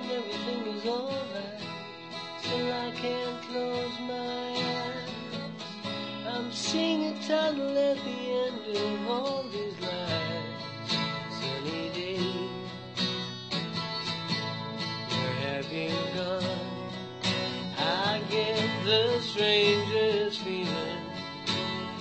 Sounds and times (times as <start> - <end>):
Music: 0.0 - 22.0.